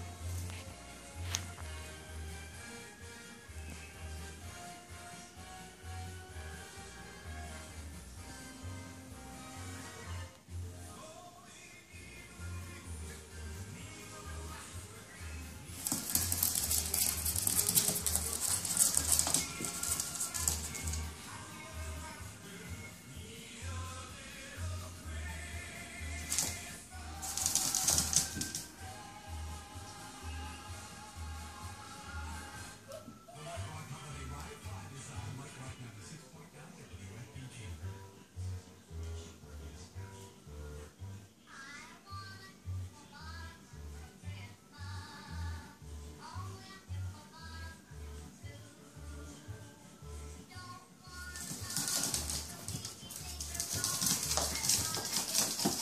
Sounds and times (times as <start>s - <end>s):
Music: 0.0s - 55.8s.